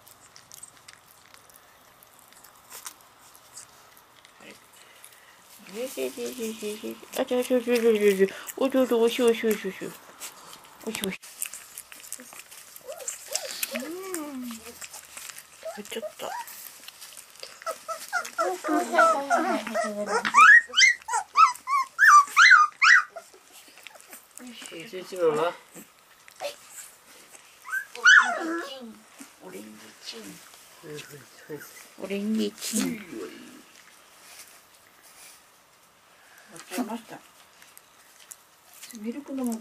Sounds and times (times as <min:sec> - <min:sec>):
Dog: 0:11.4 - 0:24.5, 0:25.7 - 0:29.4.